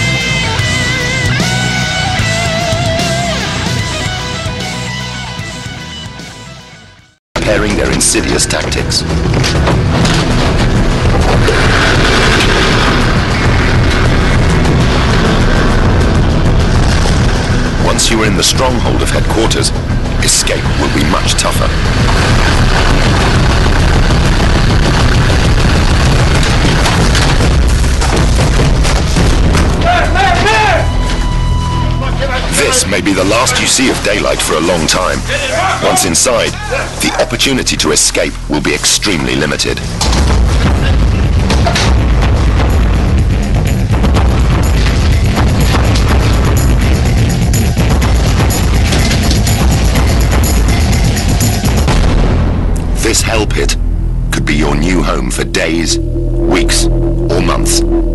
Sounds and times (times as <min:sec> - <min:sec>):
Music: 0:00.0 - 0:58.1
Boom: 0:09.0 - 0:31.2, 0:40.0 - 0:58.1.